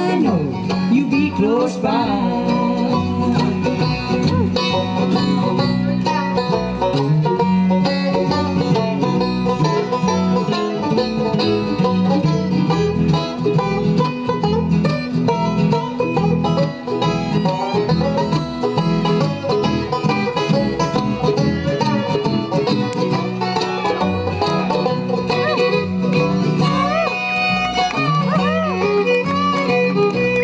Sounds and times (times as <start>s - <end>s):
Banjo: 0.0s - 30.4s
Bluegrass: 0.0s - 30.4s
Bowed string instrument: 0.0s - 30.4s.